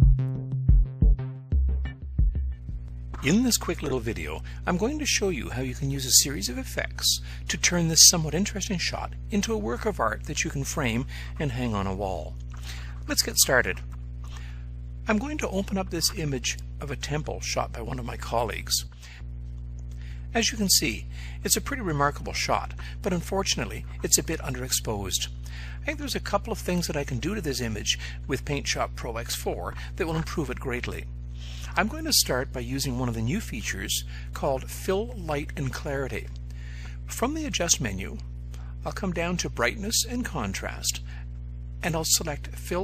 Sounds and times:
Speech: 3.2s - 12.4s, 13.0s - 13.9s, 15.0s - 18.9s, 20.3s - 36.4s, 37.1s - 41.1s, 41.8s - 42.8s.

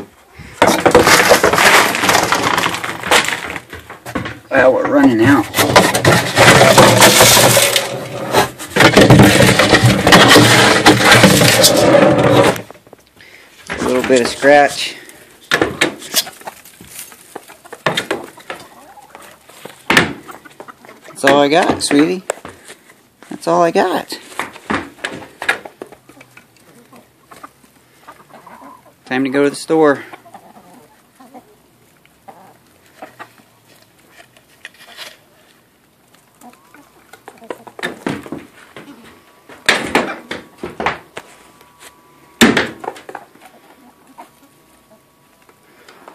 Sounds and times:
Cluck: 16.0s - 21.2s, 26.0s - 29.0s, 30.0s - 31.6s, 32.2s - 33.4s, 36.4s - 37.9s, 43.2s - 45.1s.

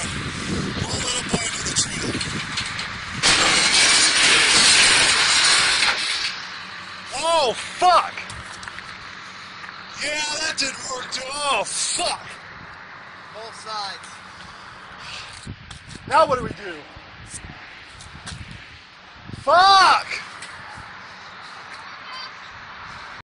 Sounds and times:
Speech: 0.8s - 2.2s, 7.1s - 8.2s, 10.0s - 12.4s, 13.4s - 14.2s, 16.1s - 16.9s, 19.5s - 20.2s.

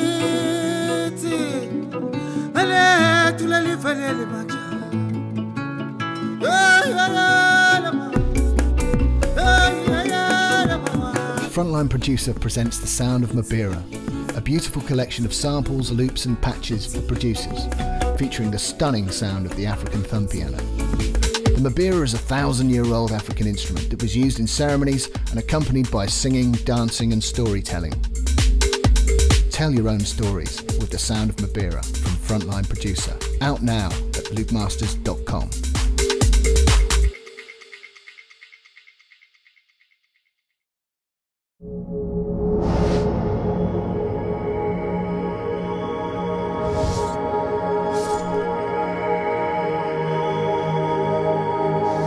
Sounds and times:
Music: 0.0s - 40.4s, 41.6s - 52.0s
Speech: 11.4s - 20.6s, 21.5s - 28.0s, 29.5s - 35.6s.

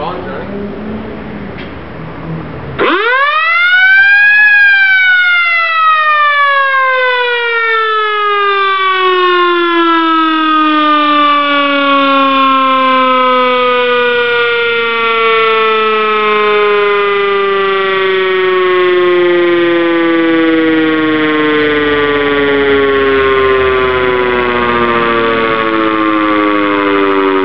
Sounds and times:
Police car (siren): 2.8s - 27.4s.

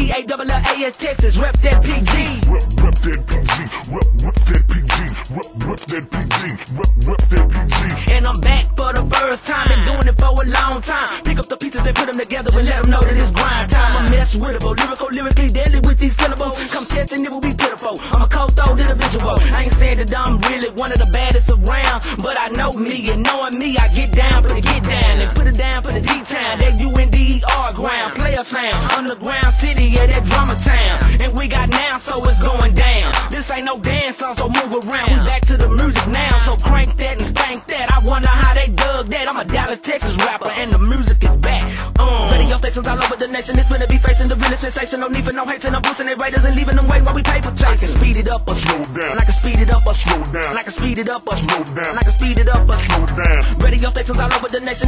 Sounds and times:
Music: 0.0s - 54.8s.

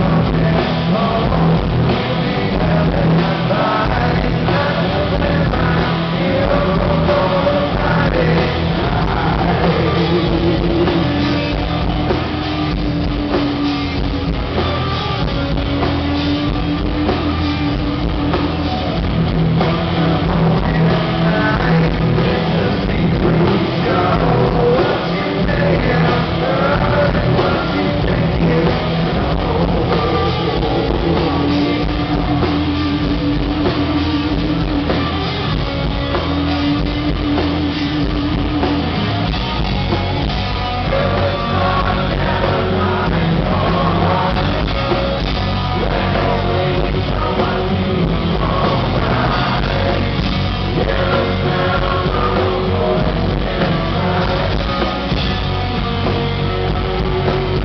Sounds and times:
Music: 0.0s - 57.6s.

